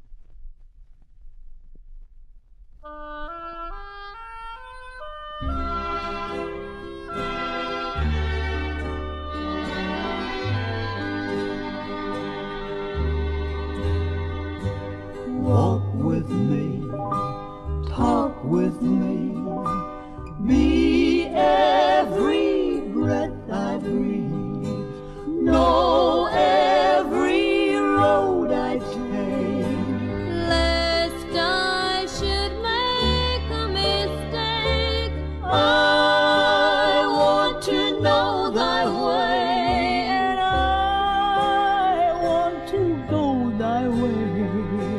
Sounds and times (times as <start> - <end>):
Choir: 15.4 - 16.8, 17.9 - 19.5, 20.4 - 30.2, 35.4 - 40.4
Female singing: 27.0 - 42.3.